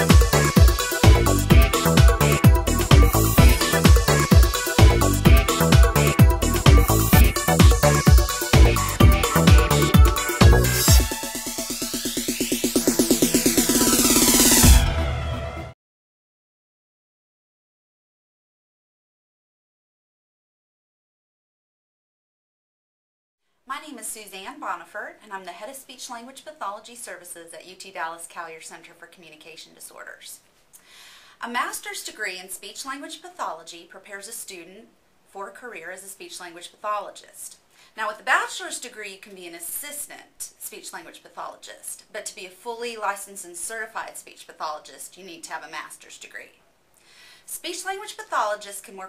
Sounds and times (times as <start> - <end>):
Narration, monologue: 23.5 - 49.0
Female speech, woman speaking: 23.7 - 30.4, 31.4 - 46.6, 47.5 - 49.0.